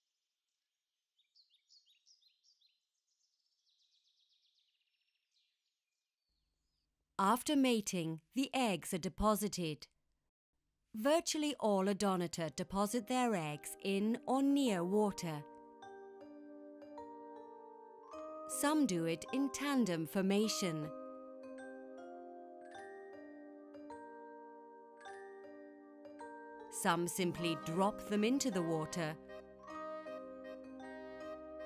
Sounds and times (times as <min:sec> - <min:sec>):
Speech: 0:07.2 - 0:09.9, 0:11.0 - 0:15.4, 0:18.5 - 0:20.9, 0:26.8 - 0:29.2
Music: 0:11.0 - 0:31.6.